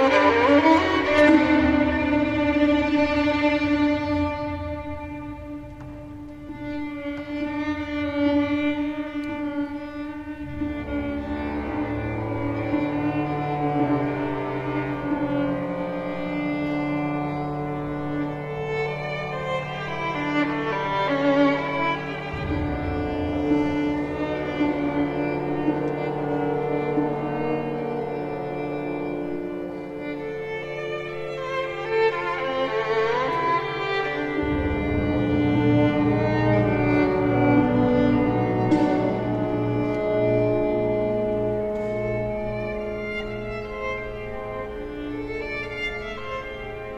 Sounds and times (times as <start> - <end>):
Violin, fiddle: 0.0 - 46.9.